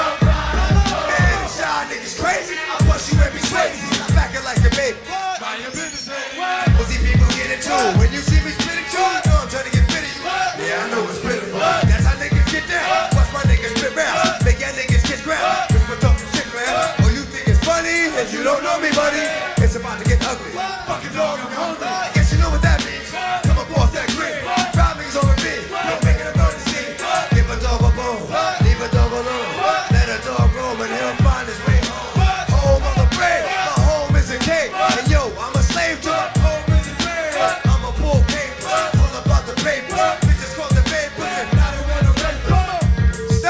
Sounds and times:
Hip hop music: 0.0s - 43.5s.

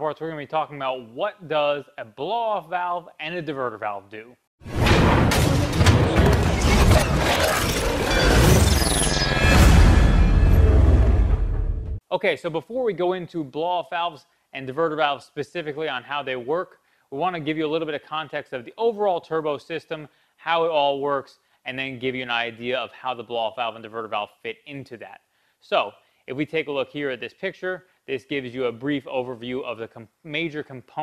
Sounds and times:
Speech: 0.0s - 4.4s, 12.1s - 31.0s.

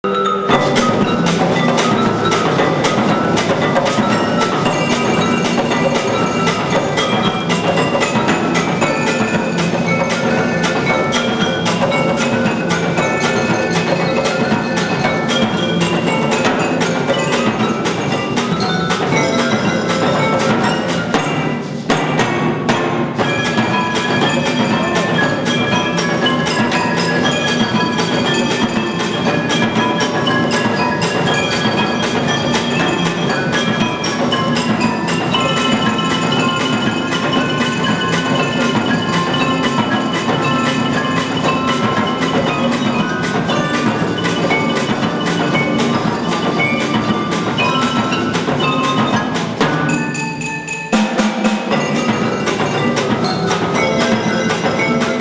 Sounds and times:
Drum: 0.2s - 55.2s.

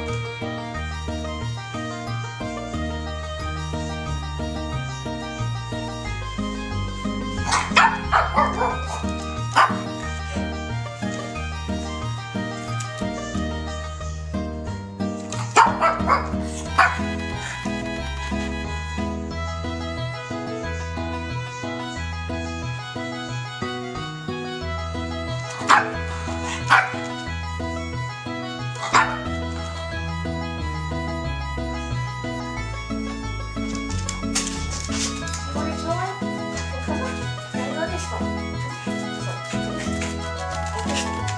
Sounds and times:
Music: 0.0s - 41.3s
Bow-wow: 7.4s - 9.9s, 15.5s - 17.0s, 25.7s - 27.0s, 28.8s - 29.3s.

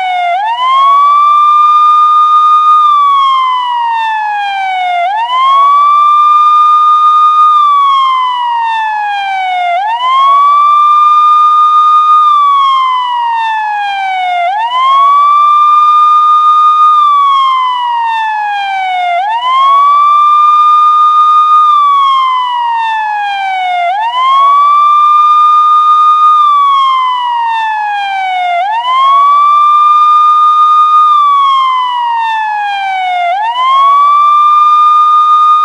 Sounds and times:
Police car (siren): 0.0s - 35.6s.

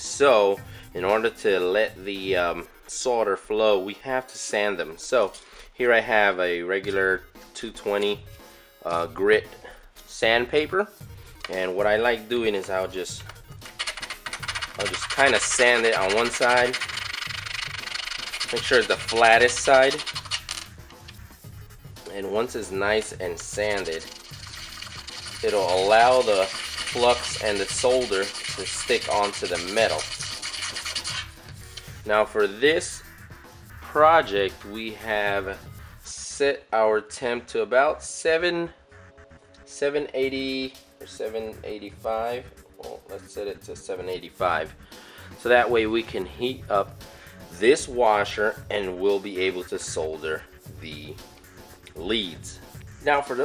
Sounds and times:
Speech: 0.0s - 8.2s, 8.8s - 10.9s, 11.5s - 13.2s, 14.8s - 16.8s, 18.5s - 20.0s, 22.1s - 24.1s, 25.4s - 30.1s, 32.1s - 33.0s, 33.9s - 38.8s, 39.7s - 44.7s, 45.4s - 46.9s, 47.6s - 51.2s, 52.0s - 53.4s
Music: 0.0s - 53.4s.

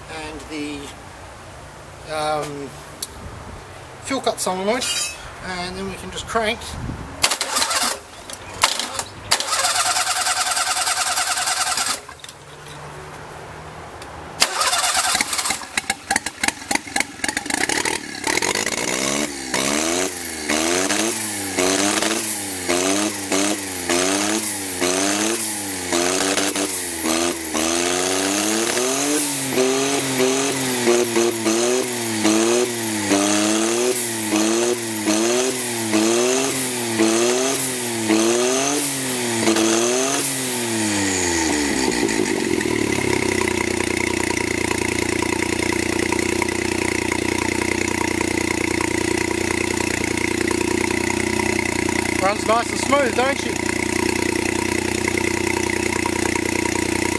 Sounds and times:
Speech: 0.1s - 1.0s, 2.0s - 2.8s, 4.0s - 6.8s, 52.2s - 53.6s.

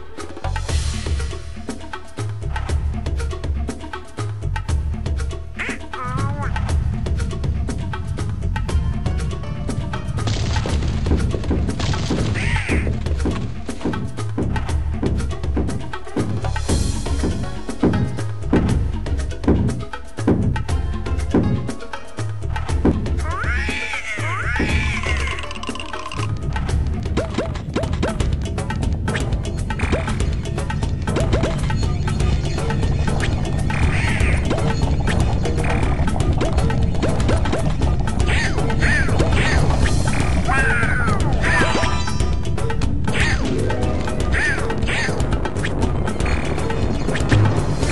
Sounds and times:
Music: 0.0s - 47.9s
Quack: 5.6s - 6.2s.

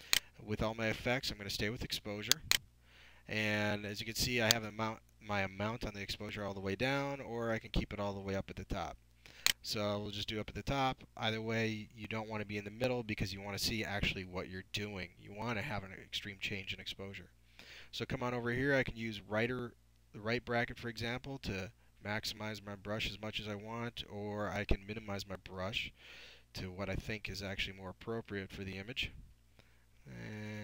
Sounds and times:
Speech: 0.4s - 2.5s, 3.3s - 9.0s, 9.6s - 29.2s, 30.1s - 30.6s.

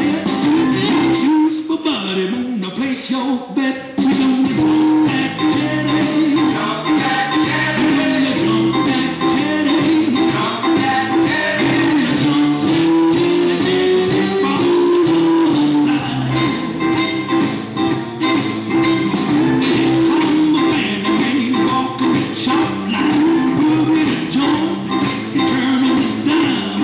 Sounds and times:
Music: 0.0s - 26.8s.

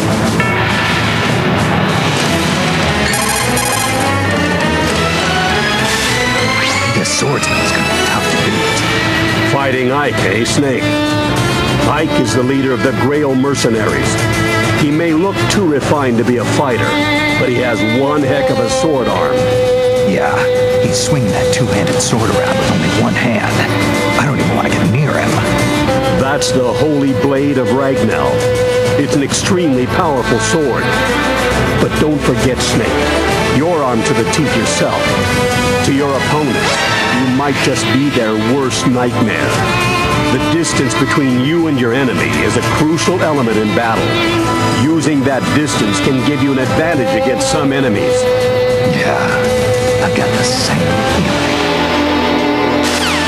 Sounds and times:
Music: 0.0s - 53.2s
Speech: 6.4s - 8.9s, 9.5s - 10.9s, 11.9s - 14.2s, 14.8s - 25.5s, 26.2s - 31.0s, 31.8s - 35.2s, 35.8s - 39.6s, 40.3s - 44.2s, 44.8s - 51.3s.

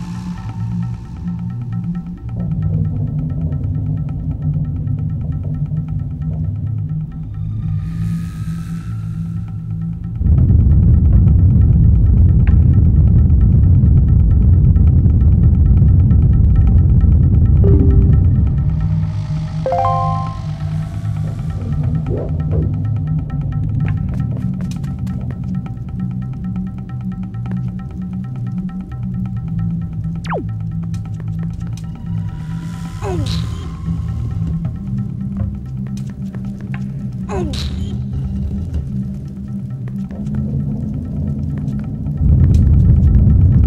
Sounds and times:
Music: 0.0s - 43.6s.

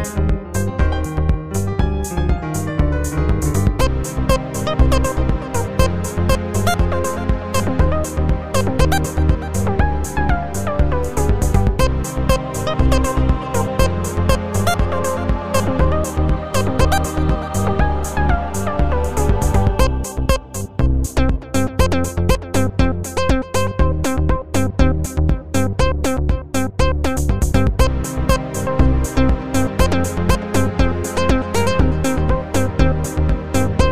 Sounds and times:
Music: 0.0s - 33.9s.

